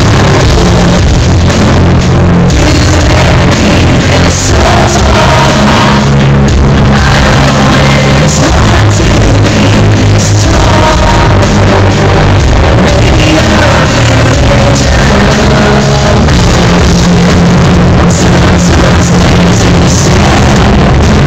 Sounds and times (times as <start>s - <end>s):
Rock music: 0.0s - 21.2s.